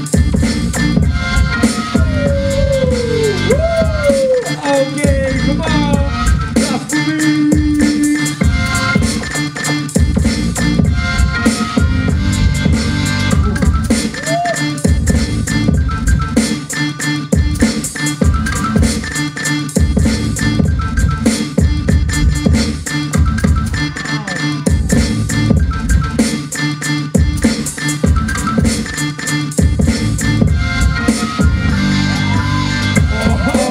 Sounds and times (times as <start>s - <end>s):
Beatboxing: 0.0s - 33.7s.